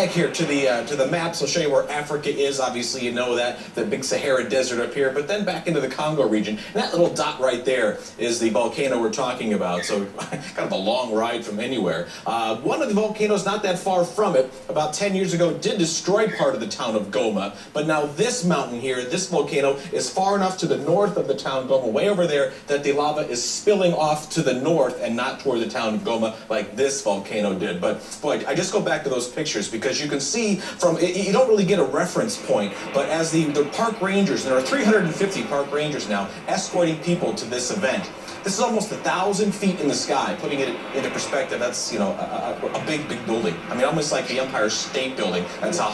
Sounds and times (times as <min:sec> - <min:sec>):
Speech: 0:00.0 - 0:45.9.